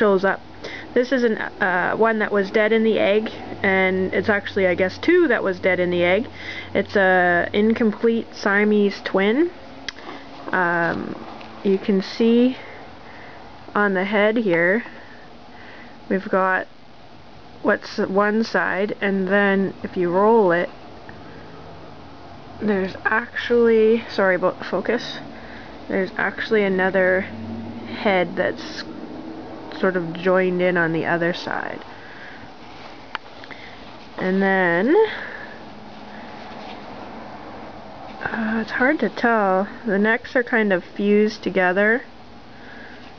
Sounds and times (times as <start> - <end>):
Speech: 0.0 - 9.6, 10.5 - 12.7, 13.7 - 14.9, 16.1 - 16.7, 17.6 - 20.7, 22.6 - 25.2, 25.9 - 27.3, 27.9 - 28.9, 29.7 - 31.8, 34.2 - 35.4, 38.2 - 42.1
Inside, small room: 0.0 - 43.1.